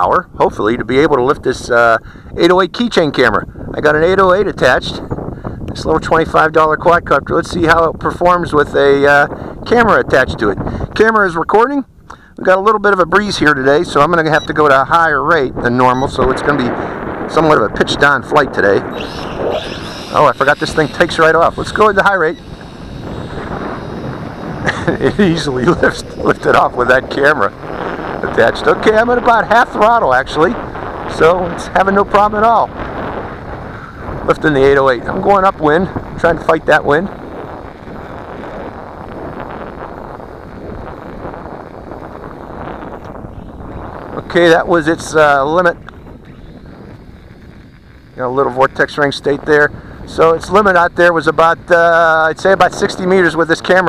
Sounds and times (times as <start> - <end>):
Speech: 0.0 - 5.0, 5.7 - 18.9, 20.1 - 22.4, 24.8 - 27.5, 28.2 - 32.7, 34.3 - 37.1, 44.2 - 45.8, 48.2 - 53.8.